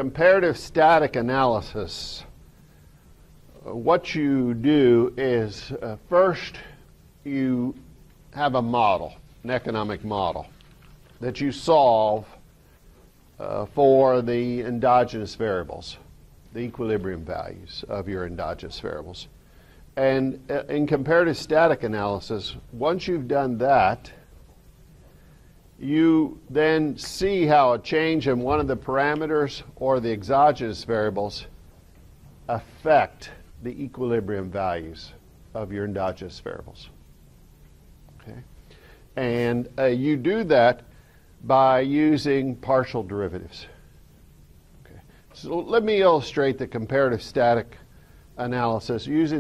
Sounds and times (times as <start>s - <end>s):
Speech: 0.0s - 2.4s, 3.5s - 10.6s, 11.2s - 12.4s, 13.4s - 19.4s, 20.0s - 24.3s, 25.8s - 31.6s, 32.5s - 37.0s, 38.2s - 38.5s, 39.2s - 43.8s, 44.8s - 47.8s, 48.4s - 49.4s.